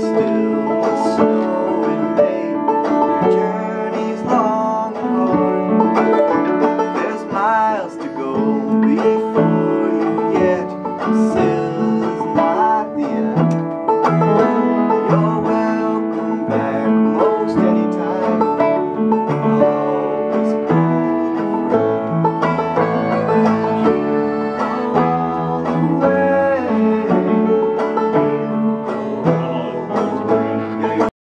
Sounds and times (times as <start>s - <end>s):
Male singing: 0.0s - 13.6s, 14.4s - 21.7s, 22.8s - 27.8s, 28.6s - 31.1s
Music: 0.0s - 31.2s.